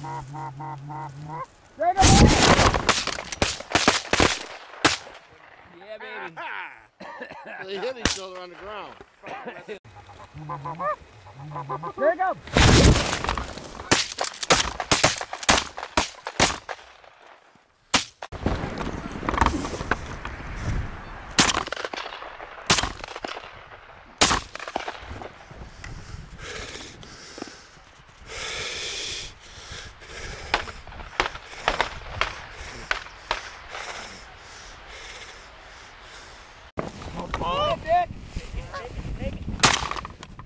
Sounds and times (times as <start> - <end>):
Honk: 0.0 - 1.5, 9.9 - 12.0.